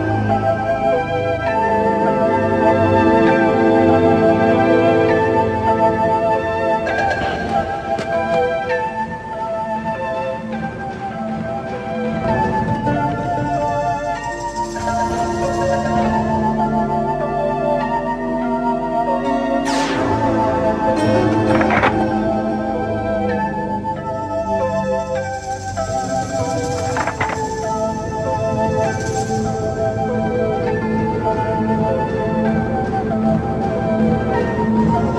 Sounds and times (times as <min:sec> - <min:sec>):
Music: 0:00.0 - 0:35.1.